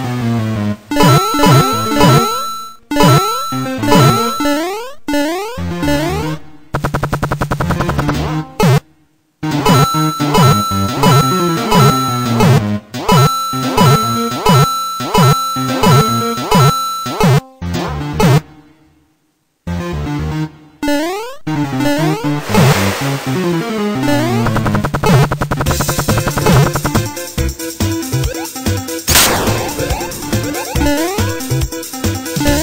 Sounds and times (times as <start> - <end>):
Music: 0.0 - 32.6.